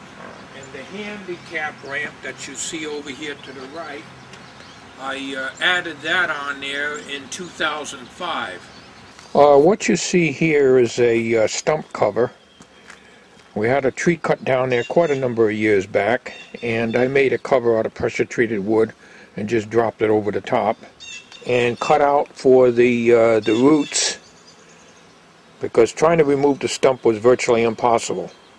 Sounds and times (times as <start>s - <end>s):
Speech: 0.5s - 4.1s, 5.0s - 8.7s, 9.3s - 12.4s, 13.6s - 24.2s, 25.6s - 28.3s.